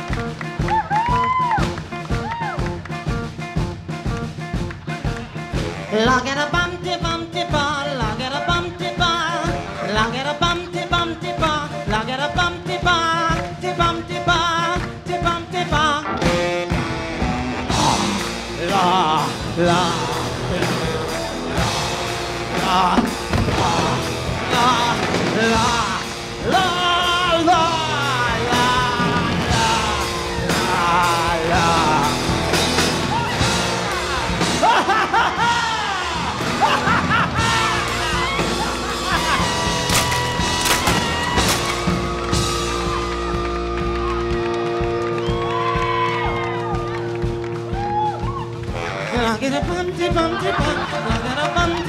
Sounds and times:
Music: 0.0s - 51.8s.

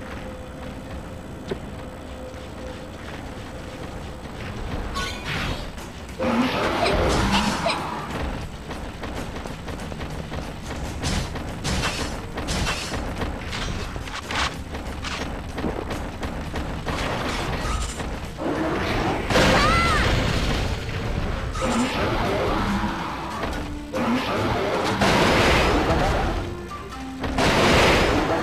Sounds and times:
Music: 0.0s - 28.4s.

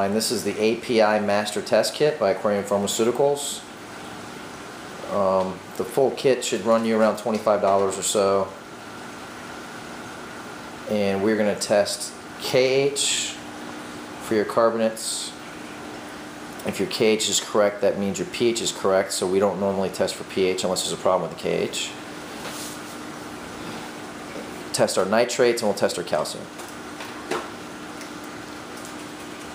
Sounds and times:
Speech: 0.0s - 3.7s, 5.0s - 8.6s, 10.9s - 13.4s, 14.2s - 15.4s, 16.6s - 22.0s, 24.7s - 26.5s.

